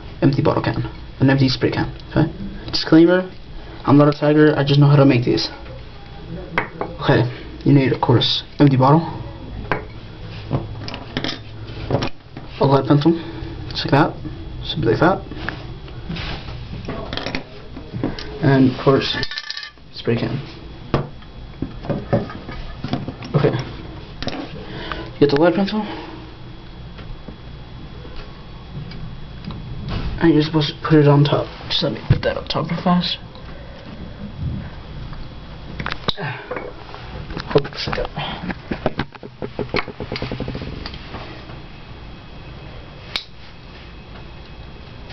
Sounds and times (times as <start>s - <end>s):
Speech: 0.2s - 9.7s, 16.9s - 19.3s, 19.9s - 20.5s, 25.2s - 26.0s, 30.2s - 33.2s.